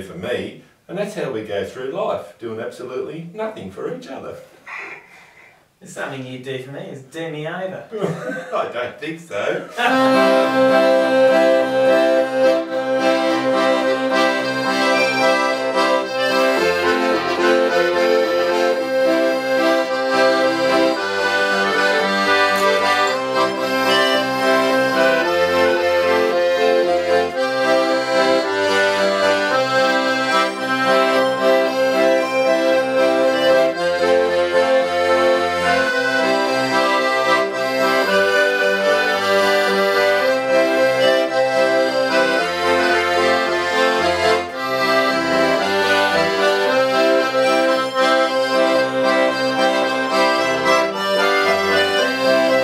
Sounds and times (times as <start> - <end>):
Speech: 0.0 - 4.9, 5.8 - 9.8
Music: 9.8 - 52.6.